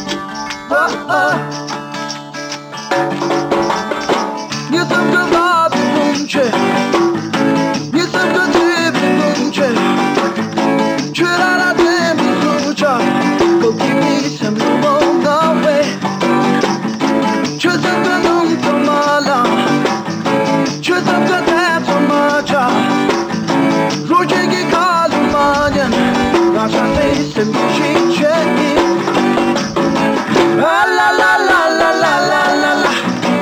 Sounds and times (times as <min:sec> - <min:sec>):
Music: 0:00.0 - 0:33.4
Singing: 0:00.7 - 0:01.4, 0:04.7 - 0:06.6, 0:17.6 - 0:19.6, 0:24.1 - 0:29.0, 0:30.4 - 0:33.4.